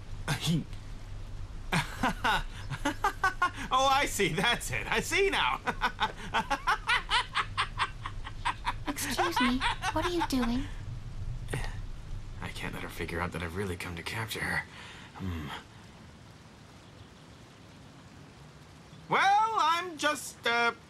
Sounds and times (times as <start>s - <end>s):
Speech: 0.3s - 0.7s, 3.7s - 5.6s, 8.9s - 10.7s, 12.4s - 15.6s, 19.1s - 20.8s.